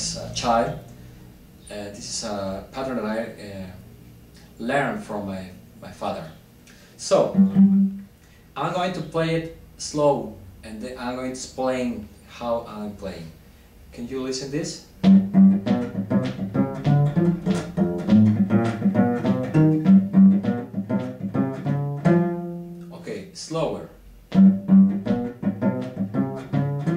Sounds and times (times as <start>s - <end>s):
Speech: 0.0s - 0.9s, 1.6s - 3.9s, 4.6s - 6.4s, 7.0s - 7.4s, 8.6s - 14.9s, 22.9s - 24.0s
Cello: 7.0s - 8.1s, 15.0s - 22.9s, 24.3s - 26.9s.